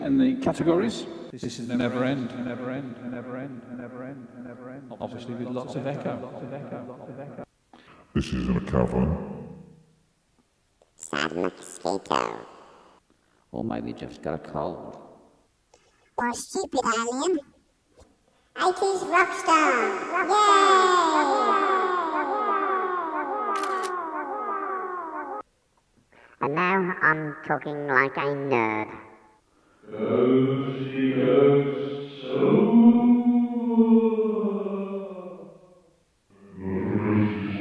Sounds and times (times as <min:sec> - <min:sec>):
Speech: 0:00.0 - 0:07.4, 0:08.2 - 0:09.4, 0:11.0 - 0:12.4, 0:13.5 - 0:14.9, 0:16.2 - 0:17.4, 0:18.6 - 0:21.8, 0:26.4 - 0:29.0, 0:29.9 - 0:31.6, 0:36.5 - 0:37.6.